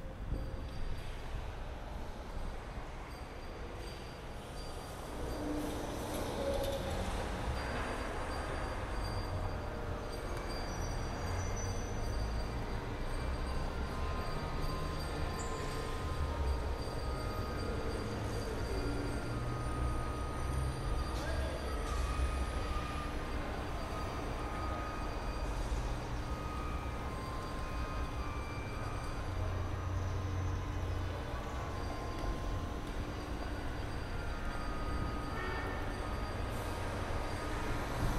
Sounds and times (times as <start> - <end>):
Music: 0.0 - 38.1.